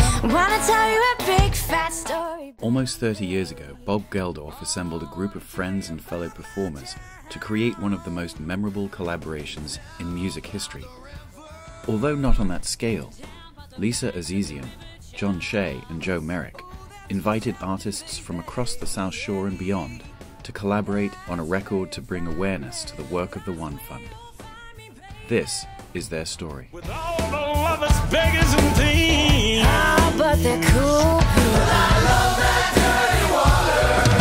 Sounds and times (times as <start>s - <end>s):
Music: 0.0s - 34.2s
Speech: 2.6s - 11.0s, 11.8s - 24.2s, 25.2s - 26.8s.